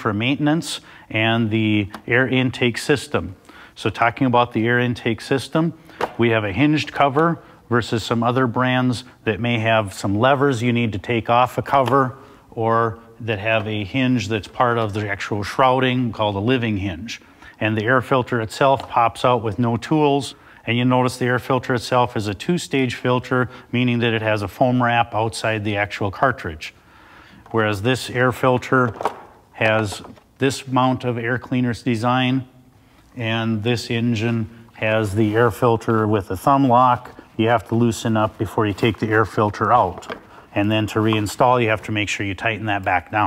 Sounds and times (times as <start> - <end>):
Speech: 0.0 - 26.8, 27.5 - 32.6, 33.2 - 43.2.